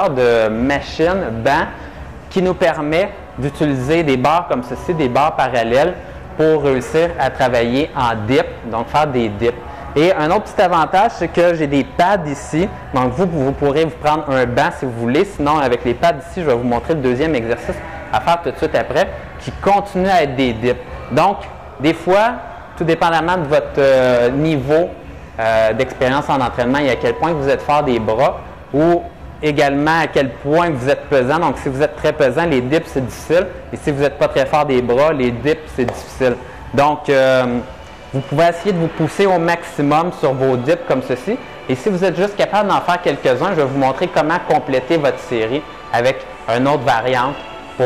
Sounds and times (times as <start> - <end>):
Speech: 0.0 - 47.8.